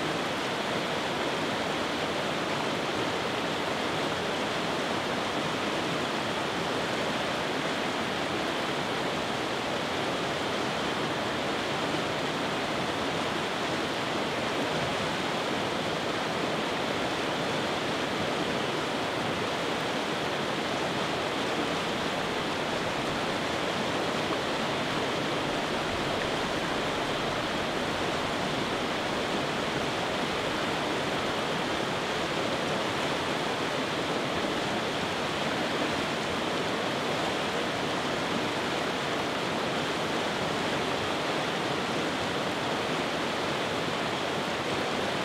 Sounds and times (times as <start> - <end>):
Stream: 0.0 - 45.2.